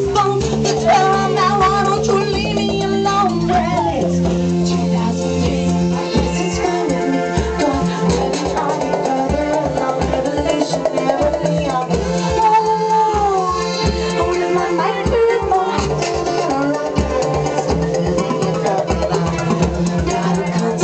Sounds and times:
Music: 0:00.0 - 0:20.8.

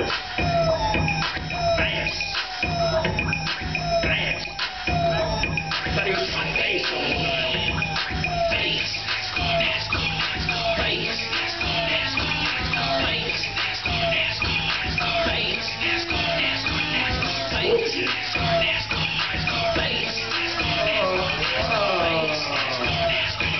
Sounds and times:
Music: 0:00.0 - 0:23.5.

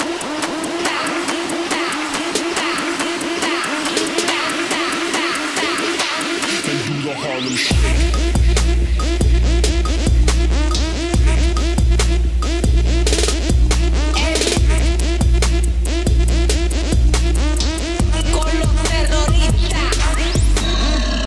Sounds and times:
Dance music: 0:00.0 - 0:21.2.

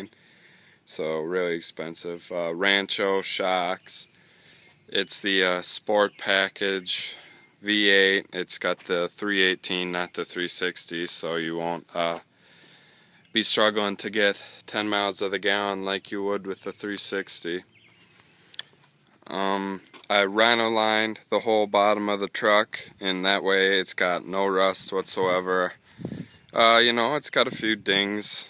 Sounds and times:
Speech: 0:00.9 - 0:04.1, 0:04.9 - 0:12.3, 0:13.3 - 0:17.7, 0:19.2 - 0:25.8, 0:26.6 - 0:28.5.

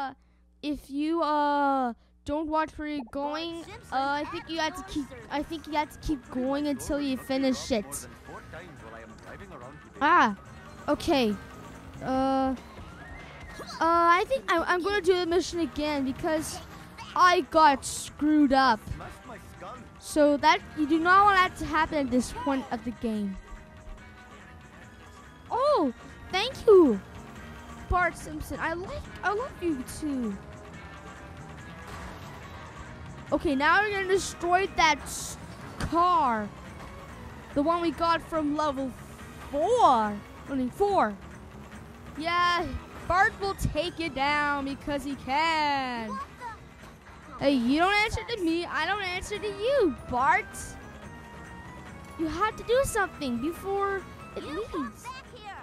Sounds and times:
Music: 0:02.3 - 0:55.6.

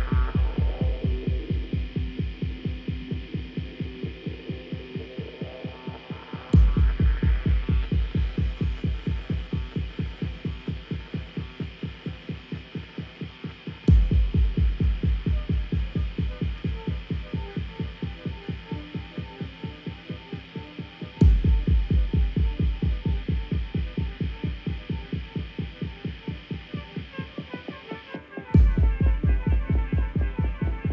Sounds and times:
Music: 0:00.0 - 0:30.9.

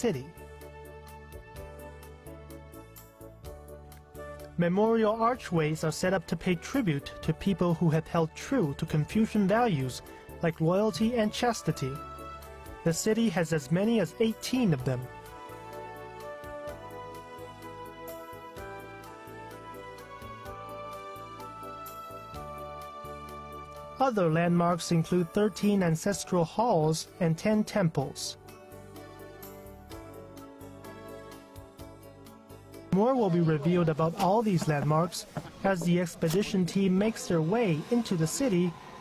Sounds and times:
Speech: 0:00.0 - 0:00.3, 0:04.6 - 0:12.0, 0:12.8 - 0:15.1, 0:24.0 - 0:28.4, 0:32.9 - 0:38.8
Music: 0:00.0 - 0:39.0.

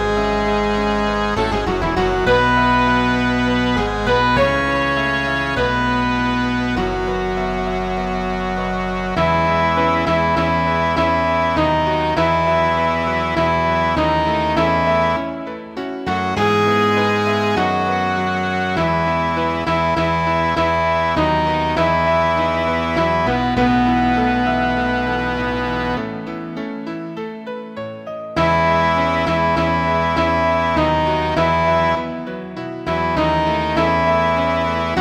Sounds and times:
Cello: 0:00.0 - 0:35.0.

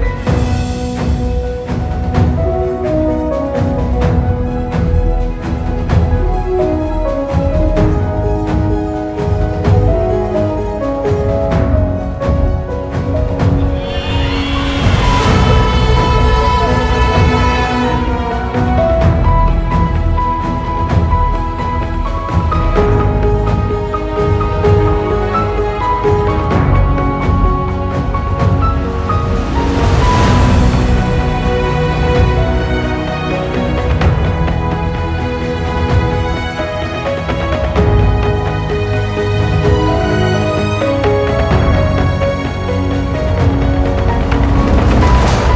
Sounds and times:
Music: 0:00.0 - 0:45.5.

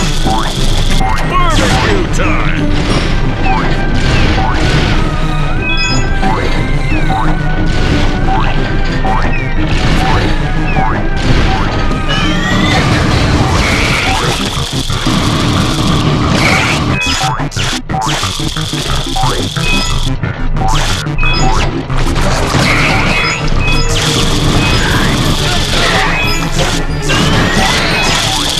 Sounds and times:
Music: 0:00.0 - 0:28.5.

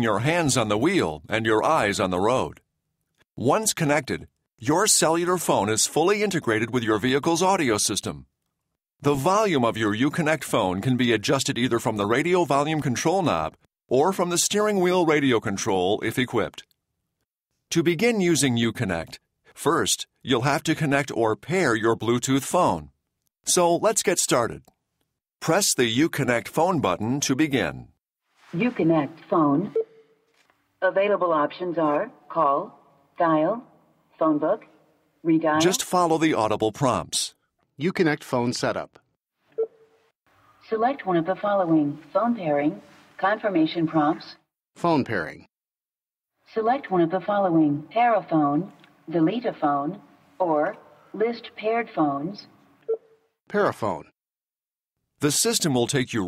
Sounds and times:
Speech: 0:00.0 - 0:02.6, 0:03.4 - 0:08.3, 0:09.0 - 0:16.7, 0:17.7 - 0:22.9, 0:23.5 - 0:24.7, 0:25.4 - 0:27.9, 0:28.6 - 0:29.8, 0:30.8 - 0:33.6, 0:35.3 - 0:39.0, 0:40.7 - 0:45.5, 0:46.6 - 0:52.5, 0:53.5 - 0:54.2, 0:55.2 - 0:56.2.

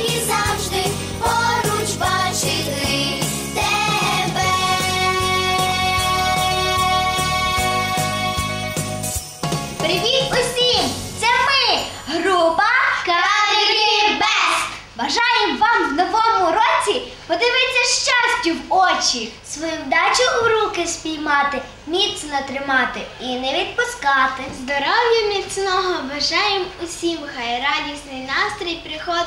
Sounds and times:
Christian music: 0:00.0 - 0:12.4
Christmas music: 0:00.0 - 0:12.7
Speech: 0:09.8 - 0:29.2.

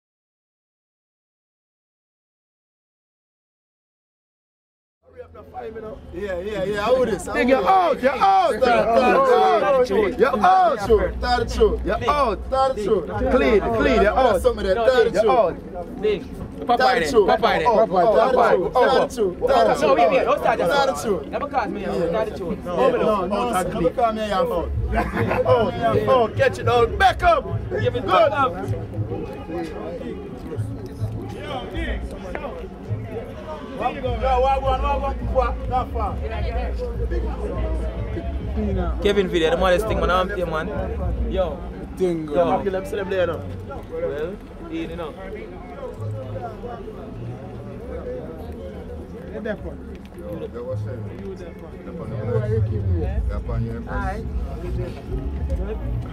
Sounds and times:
Speech: 0:05.0 - 0:56.1.

